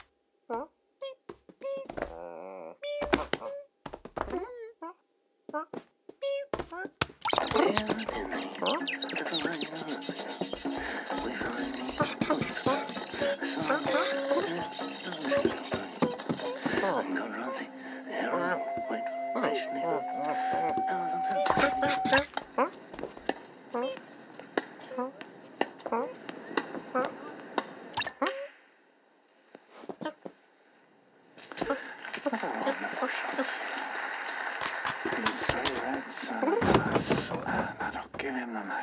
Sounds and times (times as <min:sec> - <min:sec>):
Music: 0:08.2 - 0:22.2.